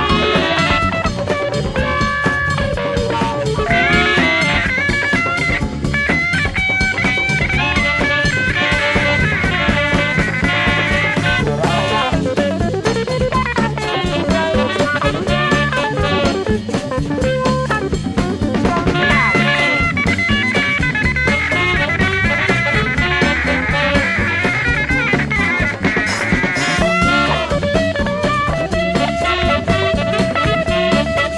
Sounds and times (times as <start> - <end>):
Swing music: 0.0 - 31.3.